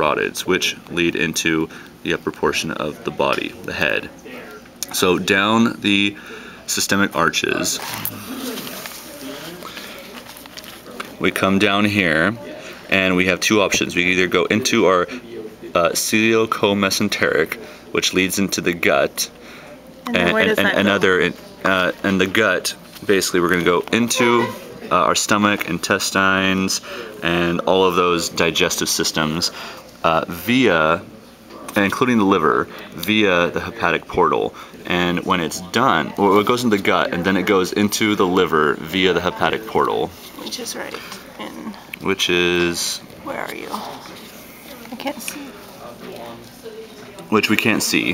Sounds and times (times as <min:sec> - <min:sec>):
Speech: 0:00.0 - 0:10.2, 0:10.8 - 0:19.4, 0:20.1 - 0:40.8.